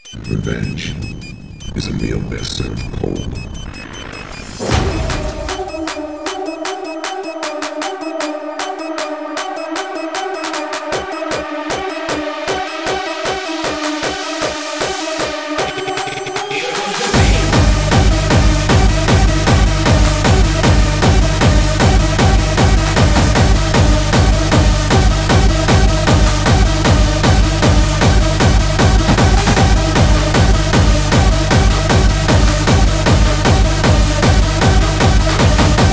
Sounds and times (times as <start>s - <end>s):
Music: 0.0s - 35.9s.